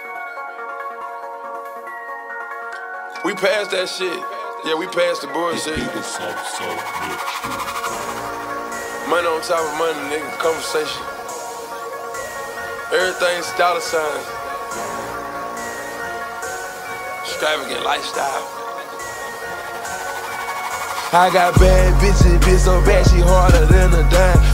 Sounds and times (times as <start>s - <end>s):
Music: 0.0s - 24.5s
Speech: 3.2s - 7.8s, 9.1s - 11.1s, 17.2s - 18.5s.